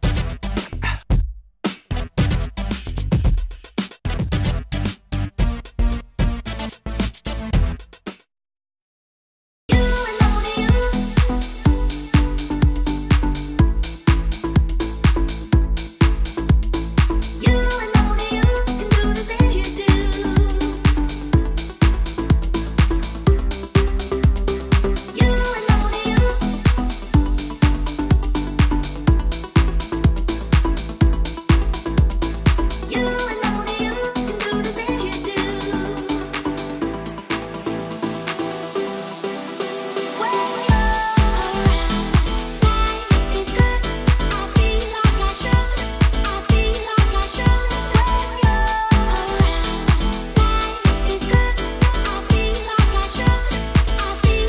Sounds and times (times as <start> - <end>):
Dance music: 9.7 - 54.4
House music: 9.7 - 54.4
Rhythm and blues: 9.7 - 54.4.